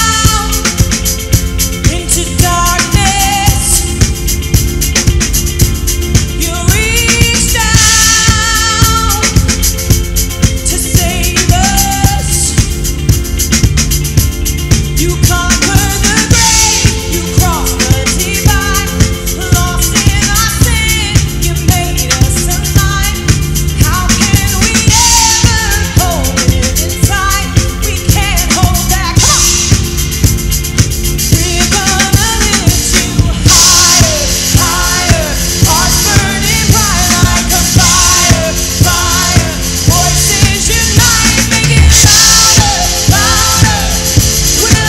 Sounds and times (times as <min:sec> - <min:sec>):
Music: 0:00.0 - 0:44.8.